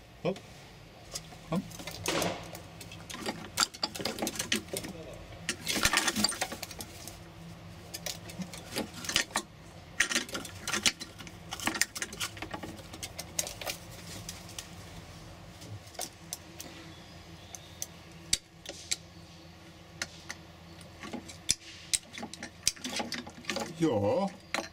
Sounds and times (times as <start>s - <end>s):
Speech: 4.8s - 5.3s, 23.6s - 24.4s.